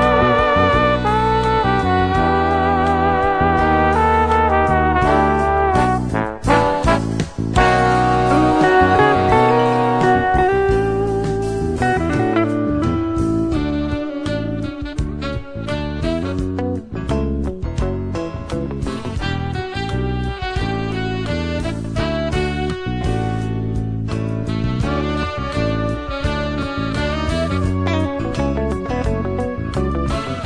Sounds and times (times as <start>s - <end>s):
Trombone: 0.0s - 16.9s, 18.9s - 30.4s.